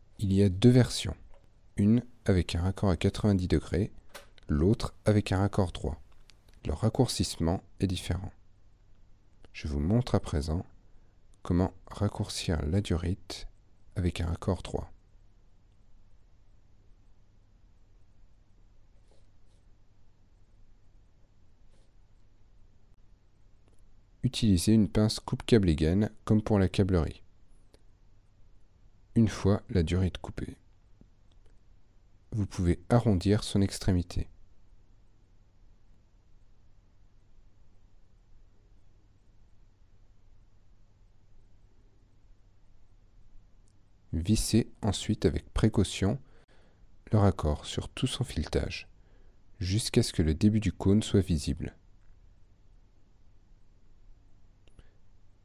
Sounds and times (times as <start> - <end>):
Speech: 0.2 - 8.4, 9.5 - 10.7, 11.4 - 15.0, 24.2 - 27.3, 29.1 - 30.7, 32.3 - 34.4, 44.1 - 46.3, 47.0 - 48.9, 49.6 - 51.8.